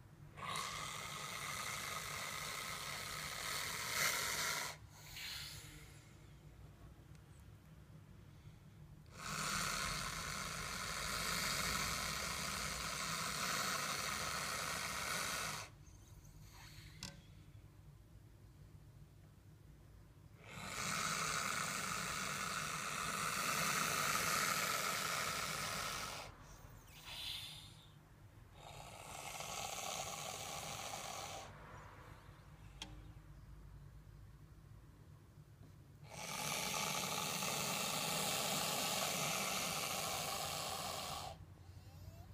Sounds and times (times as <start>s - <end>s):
Hiss: 0.4s - 6.1s, 9.1s - 15.8s, 20.4s - 27.9s, 28.6s - 31.6s, 36.1s - 41.4s.